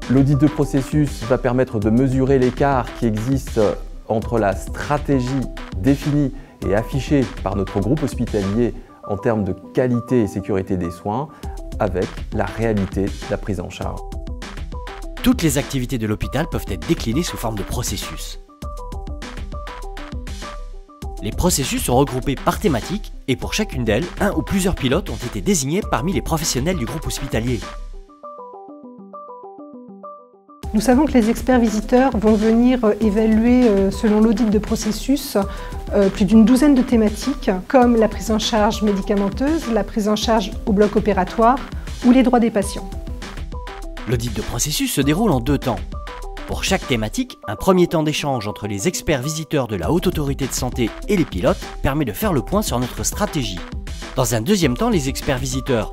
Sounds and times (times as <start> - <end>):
Speech: 0.0 - 14.0, 15.2 - 18.4, 21.2 - 27.6, 30.7 - 42.9, 44.1 - 45.9, 46.5 - 53.6, 54.2 - 55.9
Music: 0.0 - 55.9.